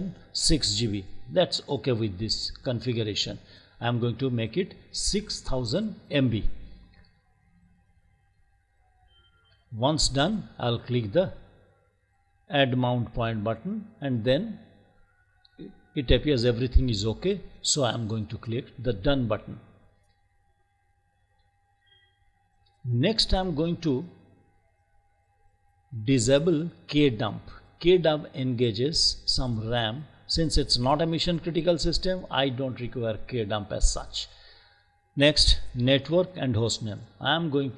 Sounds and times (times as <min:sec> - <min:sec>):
Speech: 0:00.0 - 0:06.7, 0:09.8 - 0:11.4, 0:12.5 - 0:14.6, 0:15.6 - 0:19.6, 0:22.9 - 0:24.2, 0:26.0 - 0:34.3, 0:35.2 - 0:37.7.